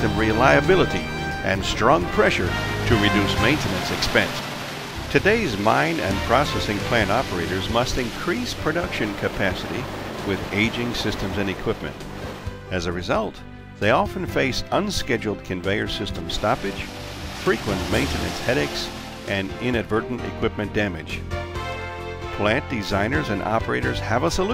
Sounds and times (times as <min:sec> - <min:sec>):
Speech: 0:00.0 - 0:04.5, 0:05.1 - 0:12.0, 0:12.7 - 0:21.2, 0:22.3 - 0:24.5
Music: 0:00.0 - 0:24.5.